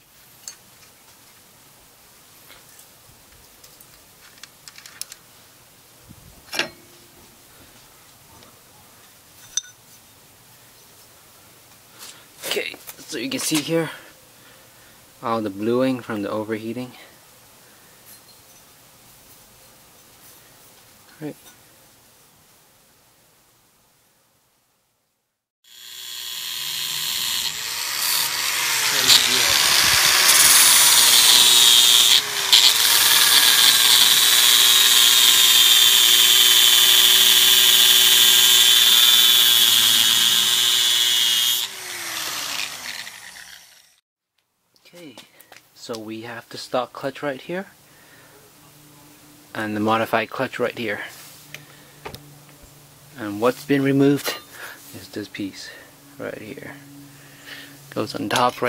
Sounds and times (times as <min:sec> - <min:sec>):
Power tool: 0:25.7 - 0:44.0.